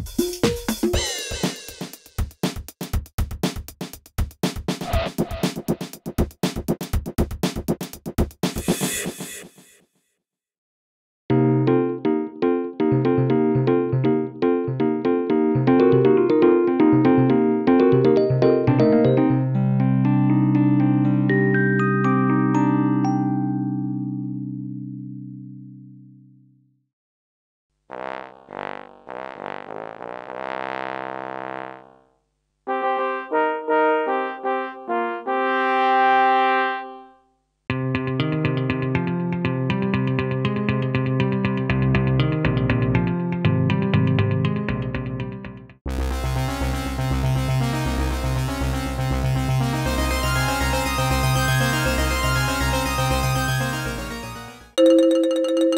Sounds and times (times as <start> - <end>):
Music: 0.0 - 9.8, 11.3 - 26.8, 32.7 - 55.7.